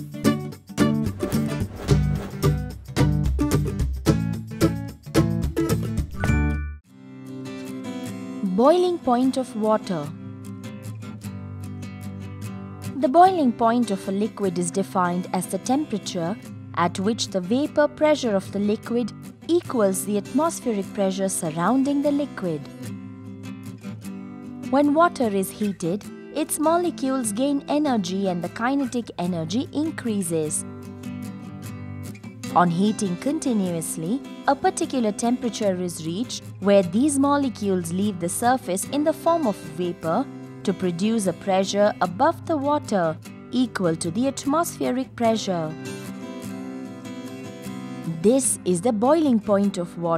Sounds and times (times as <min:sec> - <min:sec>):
Music: 0:00.0 - 0:50.1
Speech: 0:08.4 - 0:10.1, 0:13.0 - 0:22.7, 0:24.7 - 0:30.6, 0:32.5 - 0:45.8, 0:48.1 - 0:50.1.